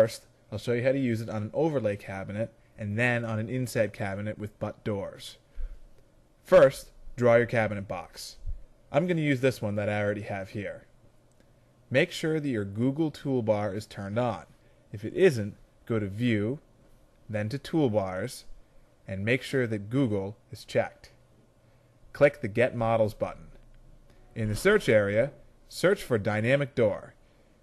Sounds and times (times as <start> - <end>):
Speech: 0.0 - 5.4, 6.4 - 10.9, 11.9 - 16.7, 17.3 - 18.5, 19.1 - 21.2, 22.1 - 23.6, 24.4 - 27.2.